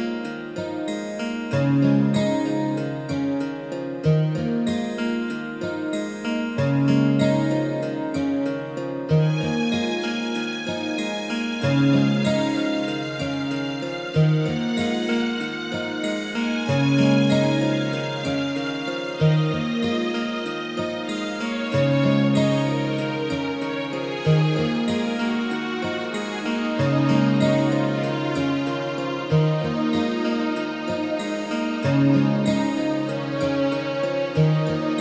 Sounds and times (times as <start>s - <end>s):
Music: 0.0s - 35.0s.